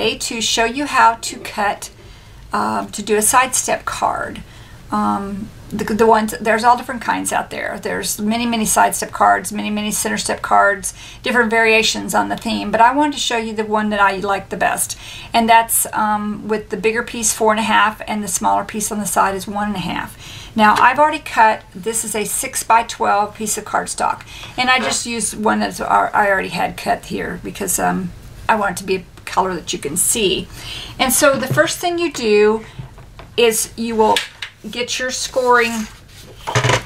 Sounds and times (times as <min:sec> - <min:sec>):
Speech: 0:00.0 - 0:02.0, 0:02.6 - 0:32.7, 0:33.4 - 0:35.9.